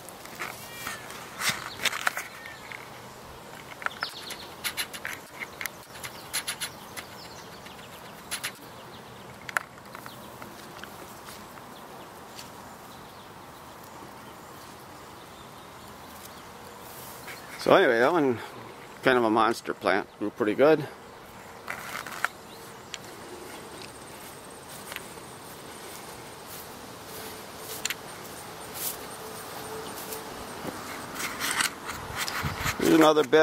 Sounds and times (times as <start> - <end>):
Outside, rural or natural: 0.0 - 33.4.